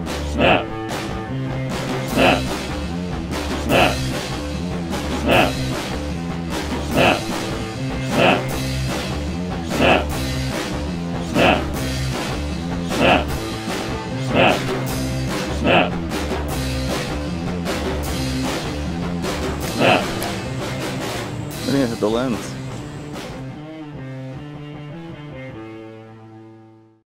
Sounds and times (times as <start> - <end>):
Music: 0.0 - 27.0
Speech: 0.3 - 0.7, 2.2 - 2.5, 3.7 - 4.0, 7.0 - 7.3, 11.3 - 11.7, 12.9 - 13.3, 19.8 - 20.2, 21.6 - 22.6.